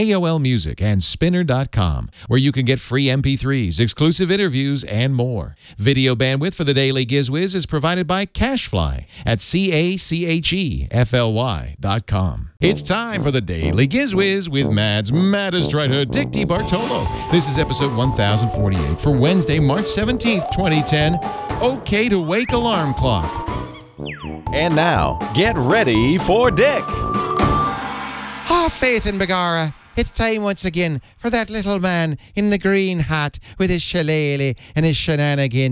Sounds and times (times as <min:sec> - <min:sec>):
Speech: 0:00.0 - 0:23.3, 0:24.5 - 0:26.8, 0:28.5 - 0:35.7
Music: 0:14.6 - 0:29.3.